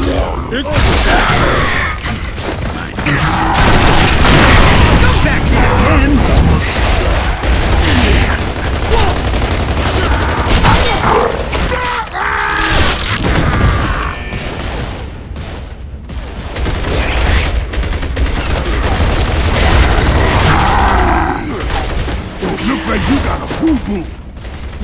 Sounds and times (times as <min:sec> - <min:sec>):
Speech: 0:02.7 - 0:03.4, 0:05.0 - 0:06.8, 0:22.4 - 0:24.1.